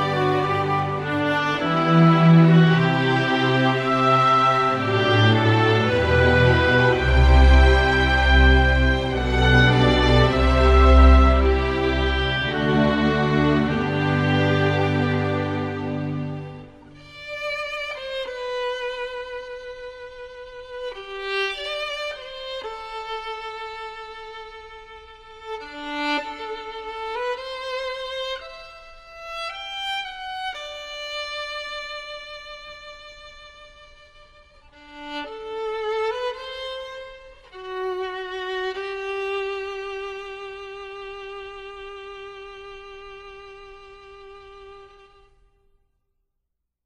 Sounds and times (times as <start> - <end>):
Bowed string instrument: 0.0 - 45.6.